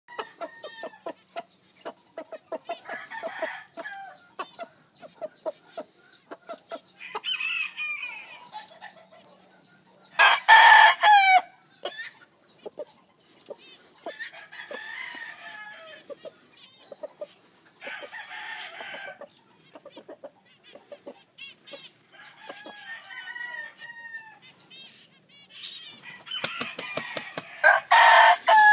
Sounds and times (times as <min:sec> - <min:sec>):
Crowing, cock-a-doodle-doo: 0:00.1 - 0:01.0, 0:02.8 - 0:04.2, 0:07.0 - 0:08.5, 0:10.2 - 0:11.5, 0:14.1 - 0:16.0, 0:17.8 - 0:19.2, 0:22.1 - 0:24.4, 0:26.0 - 0:28.7
Cluck: 0:01.0 - 0:02.9, 0:04.3 - 0:06.9, 0:11.8 - 0:14.2, 0:16.1 - 0:17.4, 0:19.2 - 0:21.9.